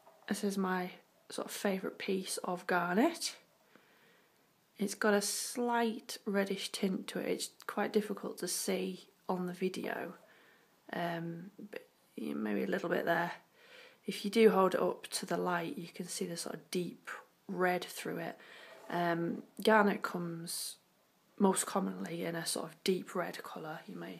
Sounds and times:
Speech: 0:00.3 - 0:03.5, 0:04.8 - 0:10.2, 0:10.9 - 0:13.4, 0:14.1 - 0:20.8, 0:21.4 - 0:24.2.

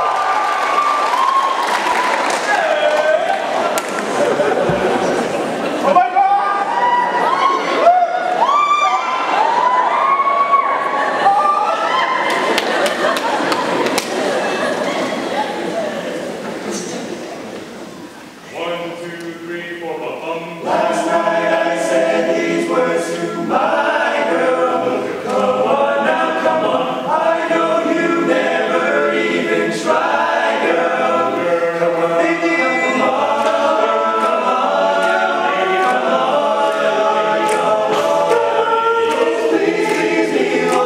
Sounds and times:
A capella: 0:19.0 - 0:40.8.

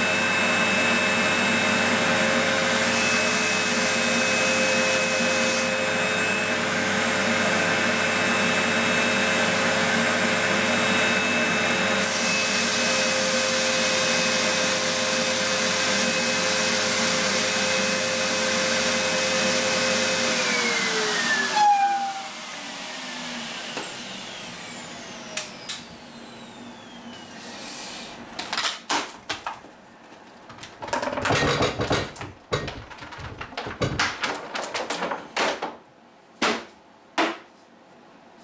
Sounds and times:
Inside, small room: 0:00.0 - 0:38.4.

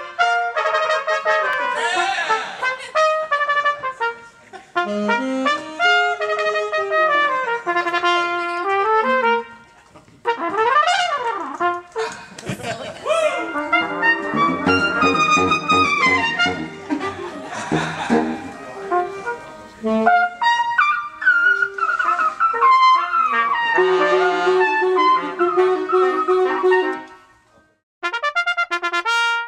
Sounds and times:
Trumpet: 0:00.0 - 0:12.1, 0:13.2 - 0:27.4, 0:28.0 - 0:29.4
Classical music: 0:02.6 - 0:09.7, 0:13.3 - 0:27.3.

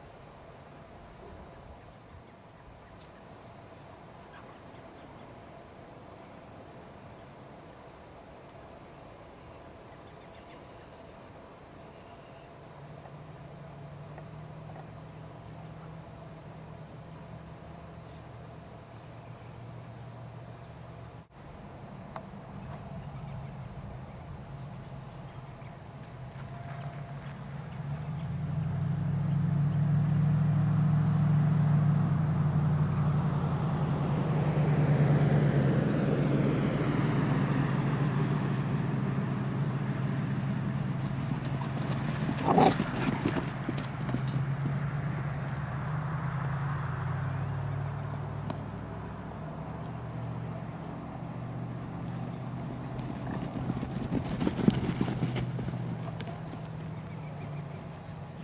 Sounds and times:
Dog: 0:42.4 - 0:43.4.

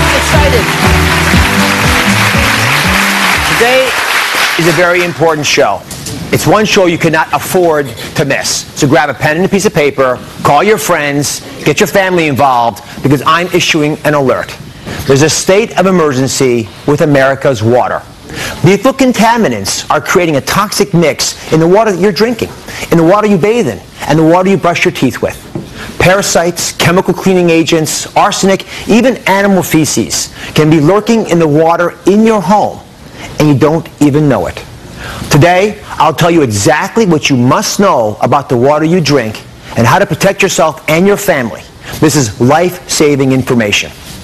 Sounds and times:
Speech: 0:03.5 - 0:04.0, 0:04.6 - 0:25.4, 0:26.0 - 0:32.8, 0:33.4 - 0:34.7, 0:35.3 - 0:44.0.

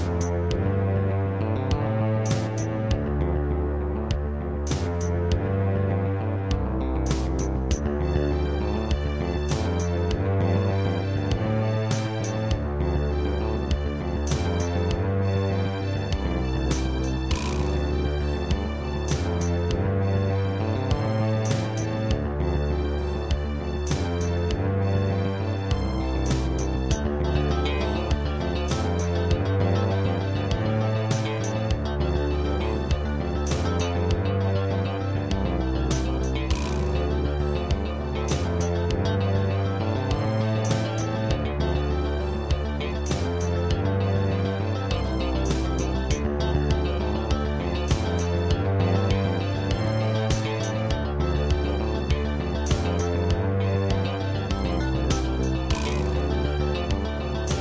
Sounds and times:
Music: 0:00.0 - 0:57.6.

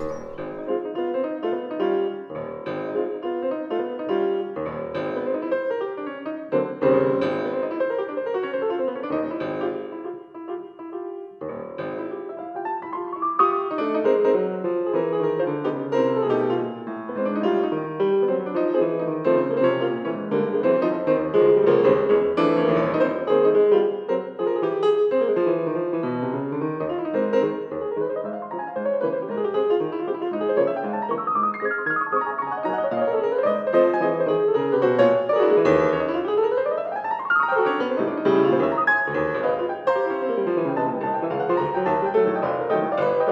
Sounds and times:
Music: 0:00.0 - 0:43.3.

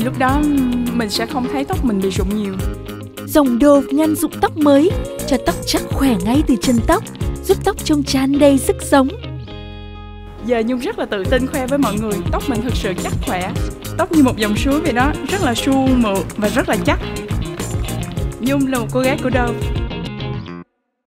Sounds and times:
Speech: 0:00.0 - 0:02.6, 0:03.3 - 0:09.2, 0:10.4 - 0:17.0, 0:18.4 - 0:19.6
Music: 0:00.0 - 0:20.7.

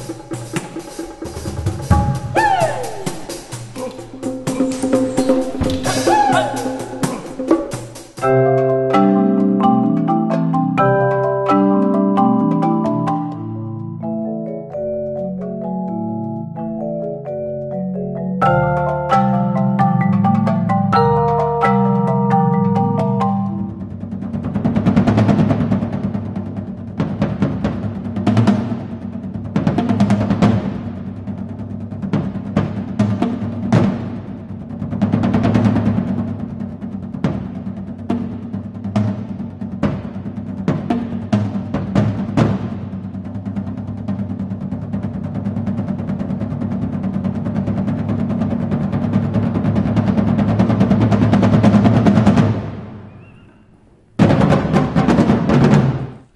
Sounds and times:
Percussion: 0:00.0 - 0:56.3.

